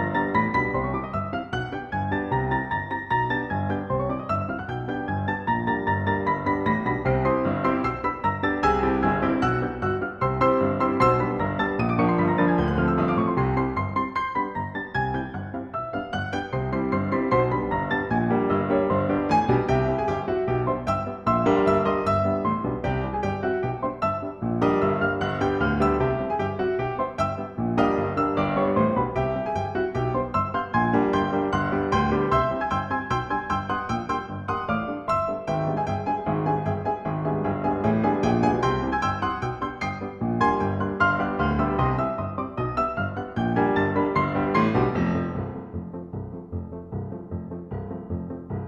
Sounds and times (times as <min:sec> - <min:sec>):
Music: 0:00.0 - 0:48.6.